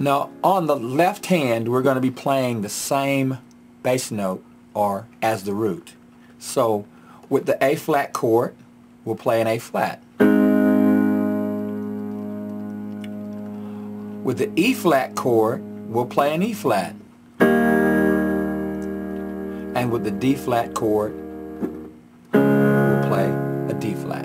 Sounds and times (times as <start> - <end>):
Speech: 0.0 - 10.0, 14.3 - 17.0, 19.8 - 21.2, 23.0 - 24.2
Electric piano: 10.2 - 24.2.